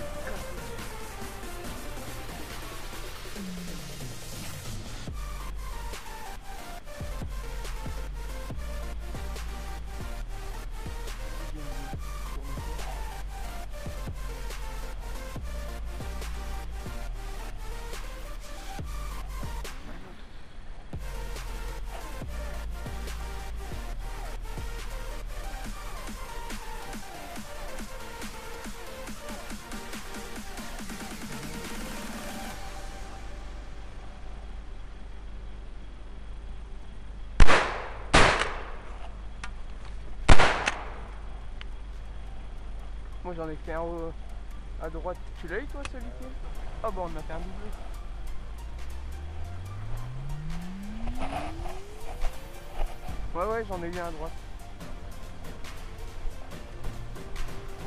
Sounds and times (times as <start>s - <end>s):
Music: 0.0s - 20.1s, 21.0s - 37.3s, 40.1s - 57.8s.